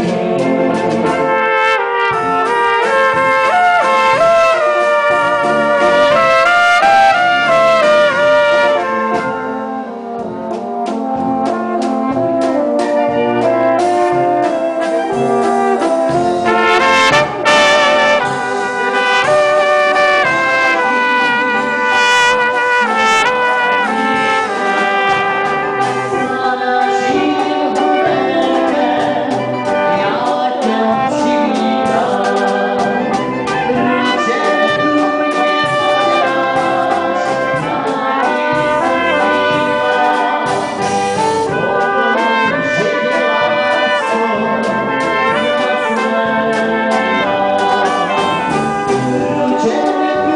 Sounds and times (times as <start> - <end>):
Bowed string instrument: 0.0 - 50.3
Trumpet: 0.0 - 50.3.